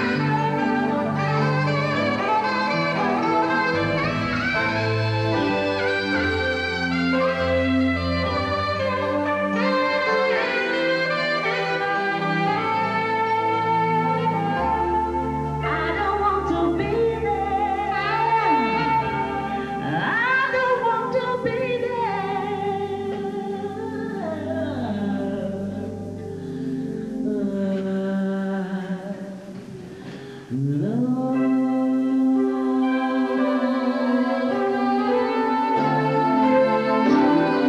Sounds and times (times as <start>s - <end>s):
Vocal music: 0.0s - 37.6s.